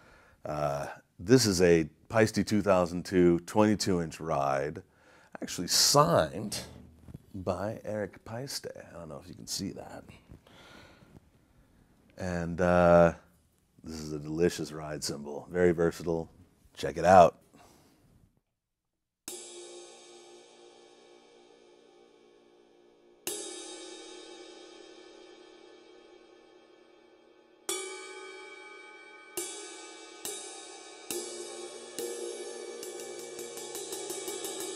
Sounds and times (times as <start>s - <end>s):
Cymbal: 19.3s - 34.7s.